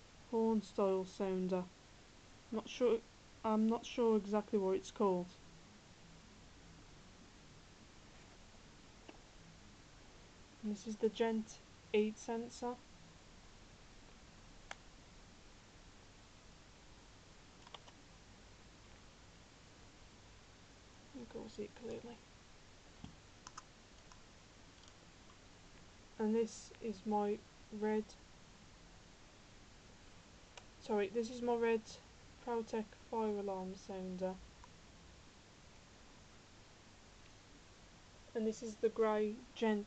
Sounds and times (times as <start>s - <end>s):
Speech: 0.3s - 1.7s, 2.5s - 5.4s, 10.6s - 12.8s, 21.1s - 22.2s, 26.2s - 28.2s, 30.8s - 34.4s, 38.3s - 39.8s.